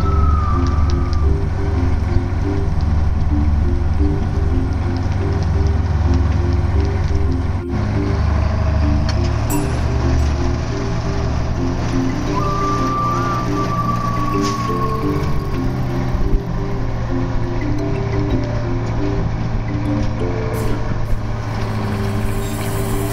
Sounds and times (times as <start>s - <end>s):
Music: 0.0s - 23.1s
Sailboat, sailing ship: 0.0s - 23.1s.